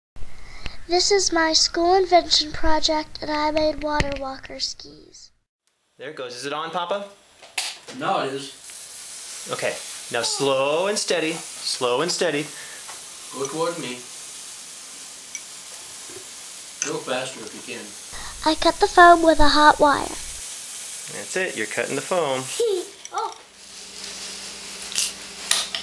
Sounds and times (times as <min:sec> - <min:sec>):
Child speech, kid speaking: 0:00.9 - 0:05.3, 0:10.1 - 0:11.0, 0:18.2 - 0:20.4, 0:22.5 - 0:23.5.